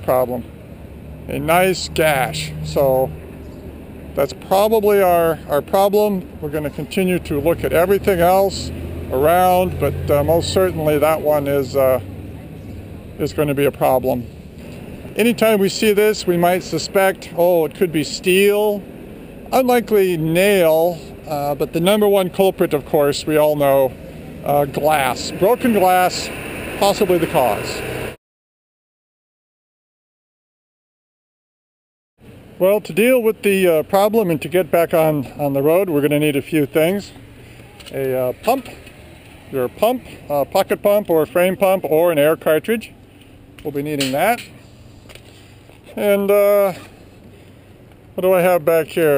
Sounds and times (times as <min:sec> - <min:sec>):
Speech: 0:00.0 - 0:00.5, 0:01.3 - 0:03.2, 0:04.2 - 0:12.0, 0:13.2 - 0:14.3, 0:15.2 - 0:18.8, 0:19.5 - 0:27.8, 0:32.6 - 0:37.2, 0:37.8 - 0:38.8, 0:39.5 - 0:42.9, 0:43.6 - 0:44.6, 0:45.9 - 0:46.9, 0:48.2 - 0:49.1
Outside, urban or manmade: 0:00.0 - 0:28.2, 0:32.2 - 0:49.1.